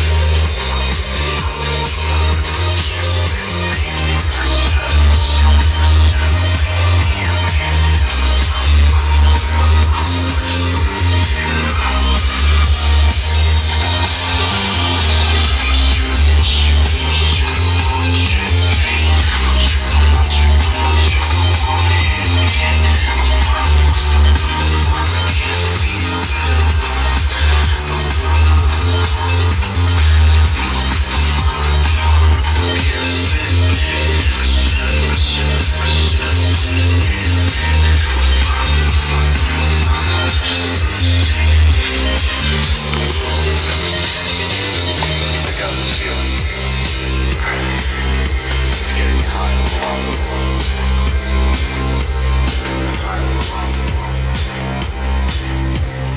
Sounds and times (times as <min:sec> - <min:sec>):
Inside, large room or hall: 0:00.0 - 0:56.1
Music: 0:00.0 - 0:56.1.